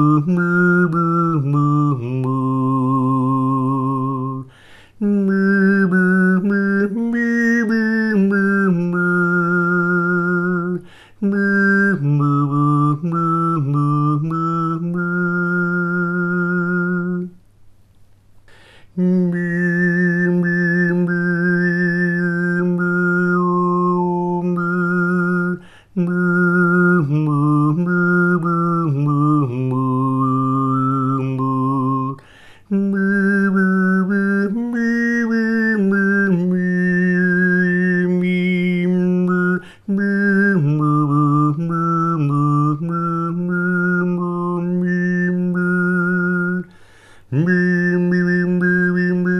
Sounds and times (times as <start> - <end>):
Synthetic singing: 0.0 - 17.4, 19.0 - 46.7, 47.3 - 49.3.